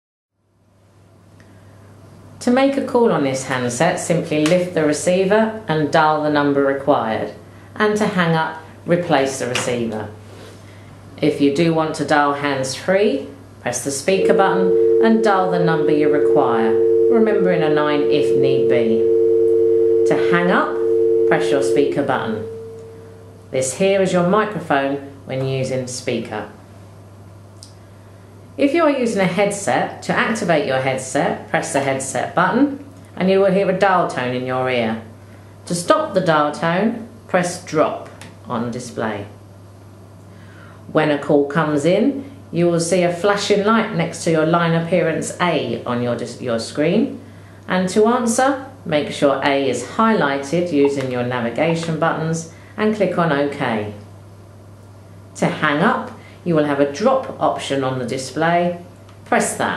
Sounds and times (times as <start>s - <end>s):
Speech: 2.4s - 10.2s, 11.2s - 19.0s, 20.1s - 22.5s, 23.5s - 26.6s, 28.6s - 35.1s, 35.7s - 39.4s, 40.9s - 54.1s, 55.4s - 59.7s
Busy signal: 14.2s - 23.3s.